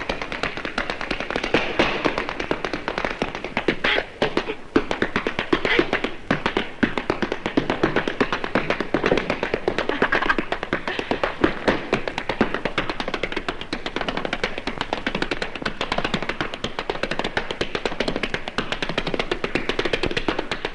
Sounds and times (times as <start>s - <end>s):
Inside, large room or hall: 0.0s - 20.7s.